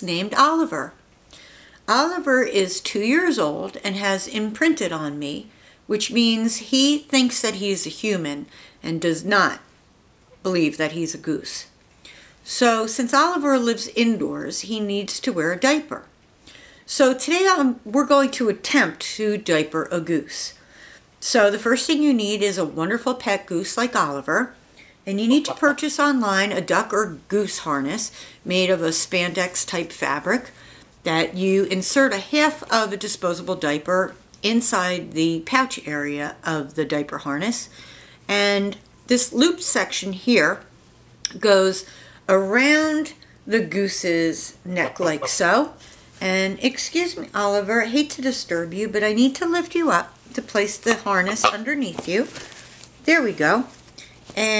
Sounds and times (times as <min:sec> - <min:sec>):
Speech: 0:00.0 - 0:01.0, 0:01.9 - 0:09.7, 0:10.4 - 0:11.8, 0:12.5 - 0:16.2, 0:16.9 - 0:20.6, 0:21.2 - 0:37.7, 0:38.3 - 0:40.7, 0:41.3 - 0:52.4, 0:53.0 - 0:53.8, 0:54.4 - 0:54.5.